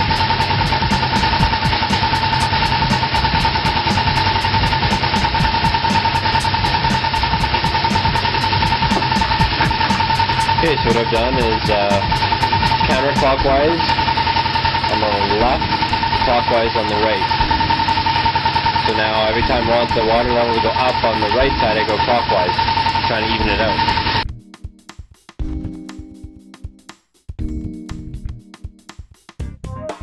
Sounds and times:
Vehicle: 0.0 - 24.2.

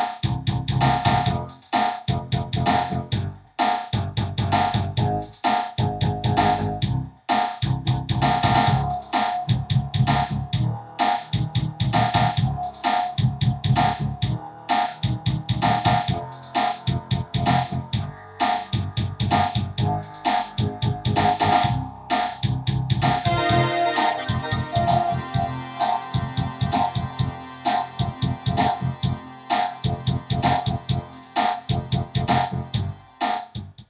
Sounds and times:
Video game music: 23.3 - 33.6.

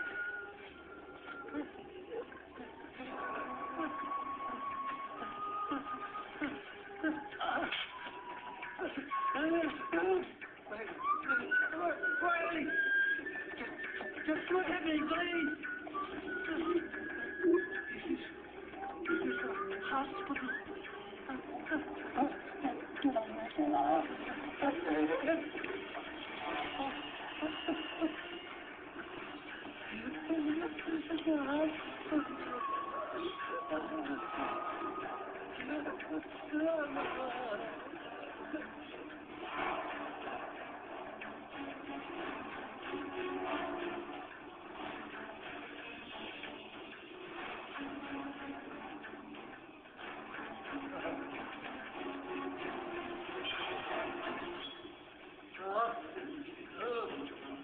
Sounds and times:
Whistling: 0.0 - 1.8, 3.6 - 21.4, 32.0 - 35.3.

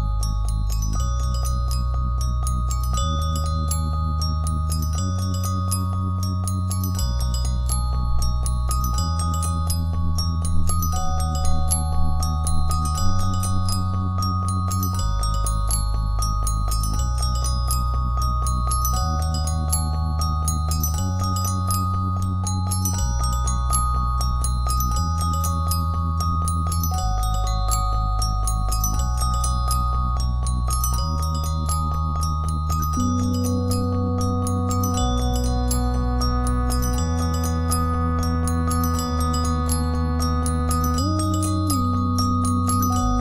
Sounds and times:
Glockenspiel: 0.0 - 43.2
Marimba, xylophone: 0.0 - 43.2.

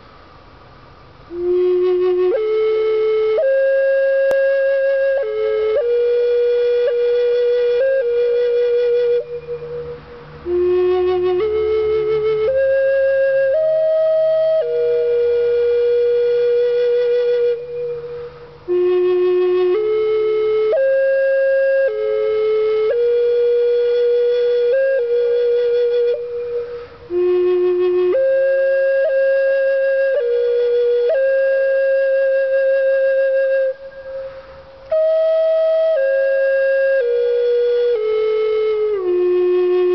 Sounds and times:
Flute: 1.3 - 39.9.

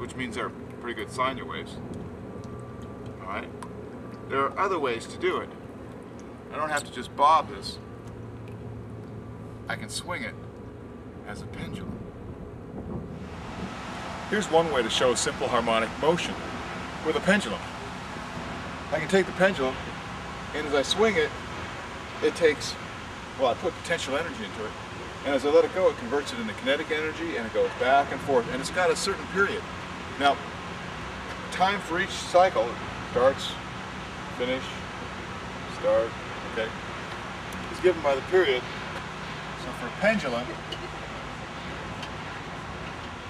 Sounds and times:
Speech: 0.0 - 1.8, 4.3 - 5.5, 6.5 - 7.8, 9.7 - 10.4, 11.3 - 12.0, 14.3 - 16.4, 17.0 - 17.6, 18.9 - 19.8, 20.6 - 21.3, 22.2 - 22.8, 23.4 - 29.6, 30.2 - 30.4, 31.5 - 33.6, 34.4 - 34.8, 35.7 - 36.7, 37.7 - 38.6, 39.6 - 40.6.

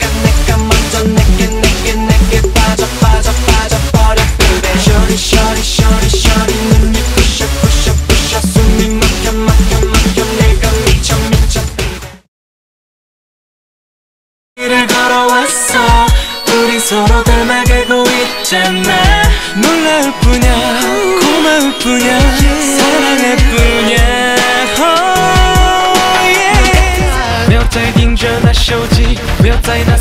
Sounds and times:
Singing: 0.0 - 12.1, 14.6 - 30.0
Music of Asia: 0.0 - 12.2, 14.6 - 30.0.

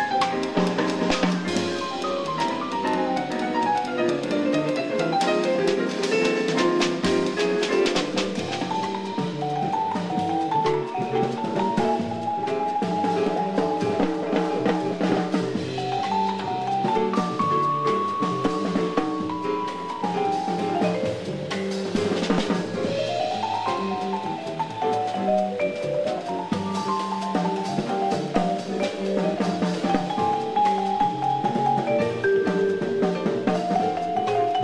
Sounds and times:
Vibraphone: 0.0 - 34.6.

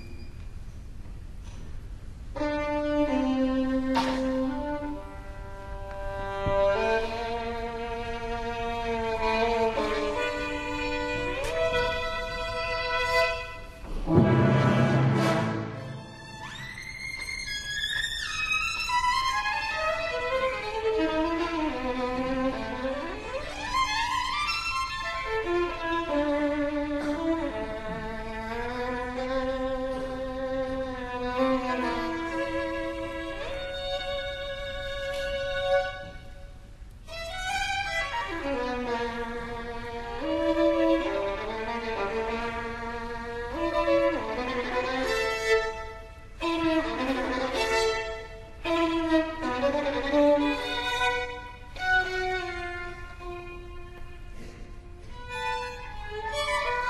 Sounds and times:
Violin, fiddle: 2.4 - 13.9, 15.6 - 56.9.

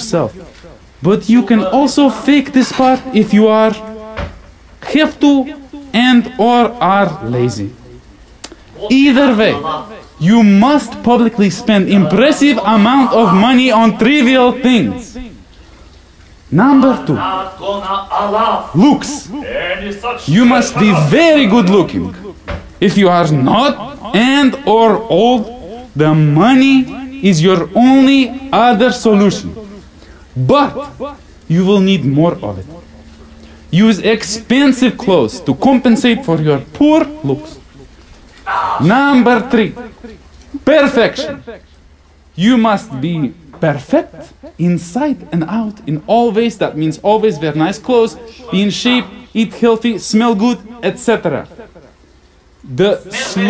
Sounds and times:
Male speech, man speaking: 0.0 - 4.0, 4.8 - 7.8, 8.8 - 15.4, 16.5 - 29.8, 30.4 - 32.8, 33.7 - 37.6, 38.5 - 41.6, 42.4 - 51.6, 52.7 - 53.5.

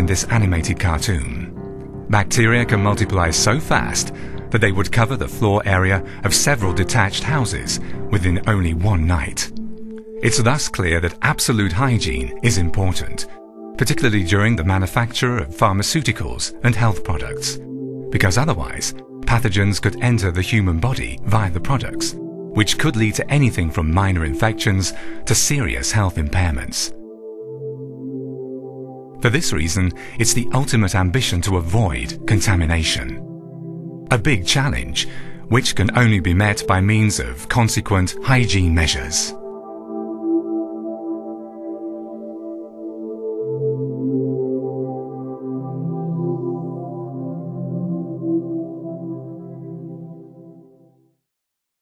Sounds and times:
Ambient music: 0.0 - 51.2.

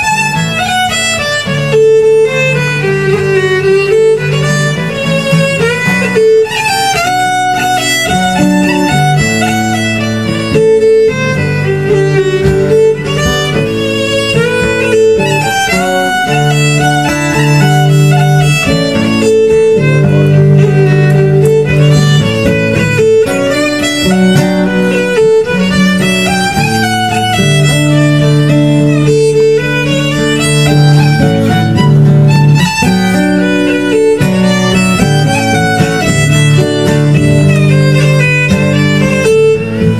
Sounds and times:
String section: 0.0 - 39.9.

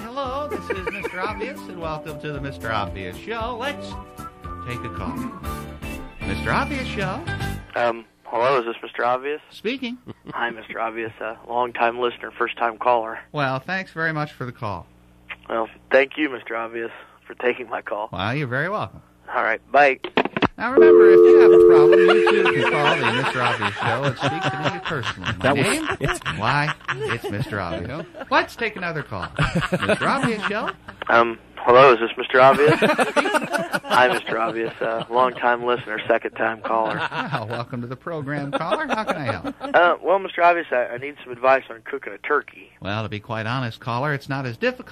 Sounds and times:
Speech: 6.2 - 20.0, 22.5 - 32.9, 33.9 - 44.9.

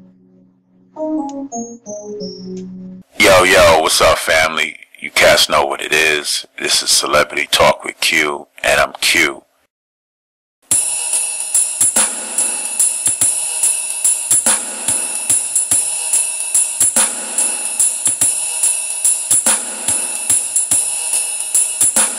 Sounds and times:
Hi-hat: 10.7 - 22.1.

